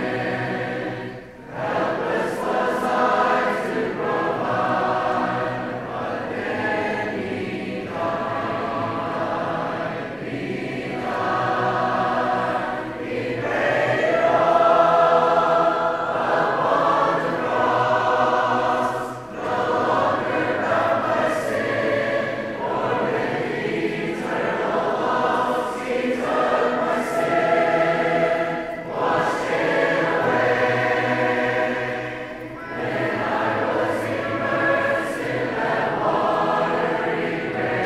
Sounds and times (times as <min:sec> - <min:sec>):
Choir: 0:00.0 - 0:37.8.